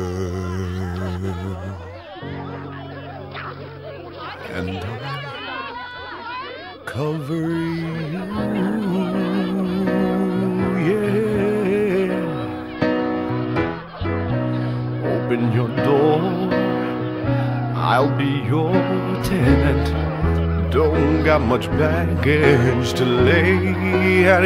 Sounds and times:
Singing: 0.0s - 2.5s, 4.4s - 6.0s, 6.7s - 13.2s, 14.7s - 24.4s.

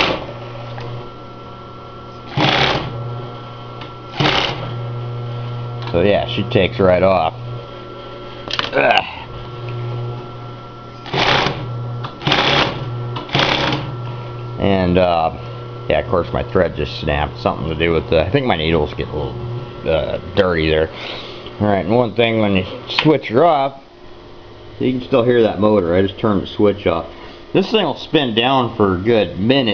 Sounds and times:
Sewing machine: 0.0s - 0.3s, 2.3s - 3.0s, 4.1s - 4.8s, 11.0s - 13.9s
Speech: 5.9s - 7.4s, 14.6s - 21.0s, 21.6s - 23.8s, 24.8s - 29.7s.

